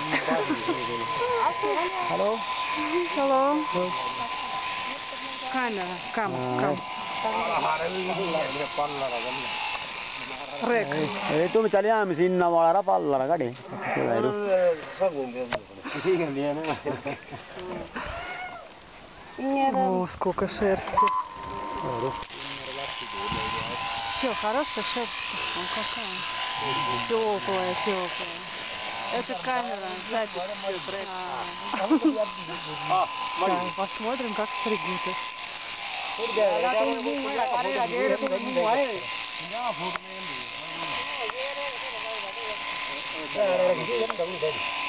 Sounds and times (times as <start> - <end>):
Electric shaver, electric razor: 0.0 - 18.7, 20.6 - 44.8.